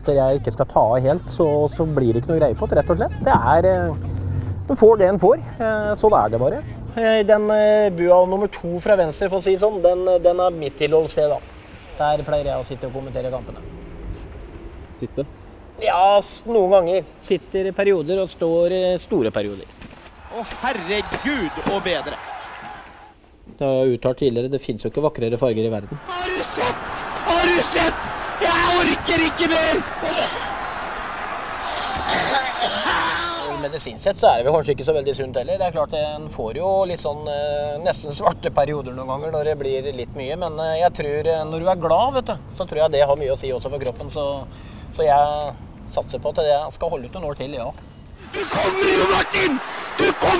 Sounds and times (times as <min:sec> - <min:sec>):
Speech: 0:00.0 - 0:04.0, 0:04.7 - 0:11.4, 0:23.6 - 0:30.5, 0:32.0 - 0:50.3.